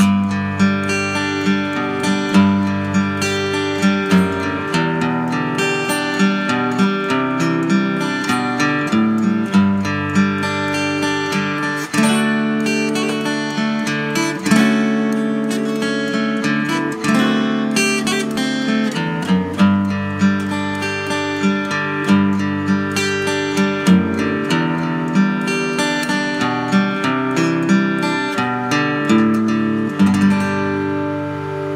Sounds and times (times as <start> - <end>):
Music: 0.0 - 31.7.